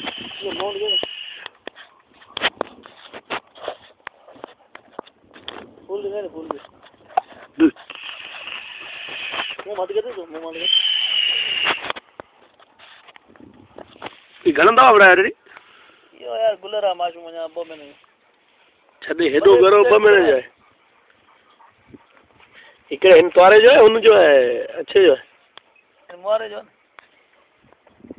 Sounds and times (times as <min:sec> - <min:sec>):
Speech: 0:05.9 - 0:06.6, 0:09.6 - 0:10.7, 0:16.2 - 0:18.0, 0:19.0 - 0:20.5.